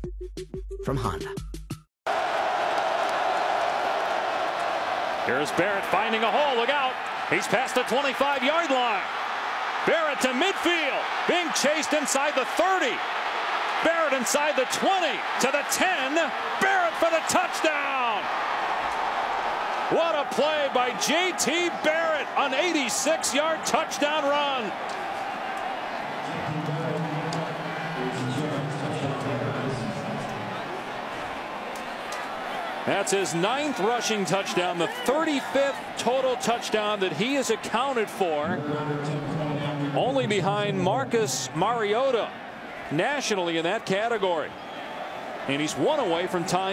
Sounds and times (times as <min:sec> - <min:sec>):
Speech: 0:00.9 - 0:01.4, 0:05.3 - 0:09.1, 0:09.9 - 0:13.0, 0:13.8 - 0:18.3, 0:20.0 - 0:24.7, 0:26.2 - 0:30.4, 0:32.9 - 0:42.3, 0:42.9 - 0:44.5, 0:45.5 - 0:46.7.